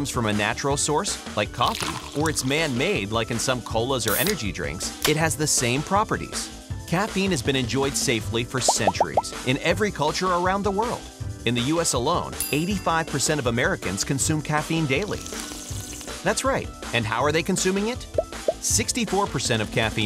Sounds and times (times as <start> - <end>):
Speech: 0.0 - 15.3, 16.2 - 20.0
Music: 0.0 - 20.0.